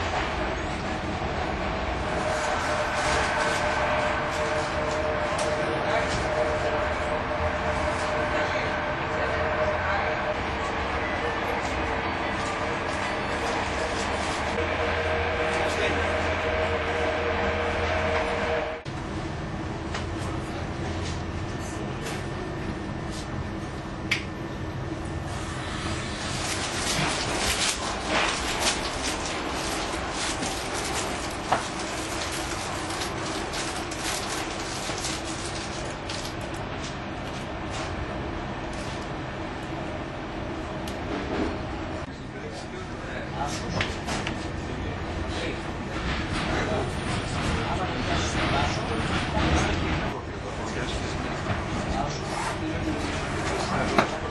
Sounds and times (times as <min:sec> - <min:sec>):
Railroad car, train wagon: 0:00.0 - 0:54.3
Subway, metro, underground: 0:00.0 - 0:54.3
Train: 0:00.0 - 0:54.3.